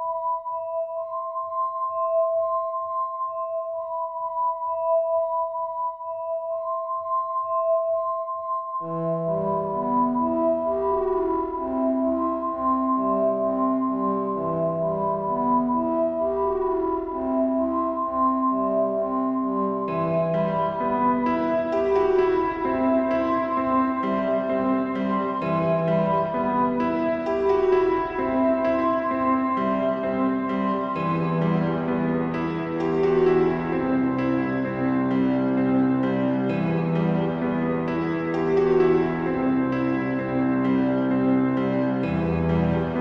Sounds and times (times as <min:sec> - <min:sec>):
Music: 0:00.0 - 0:43.0.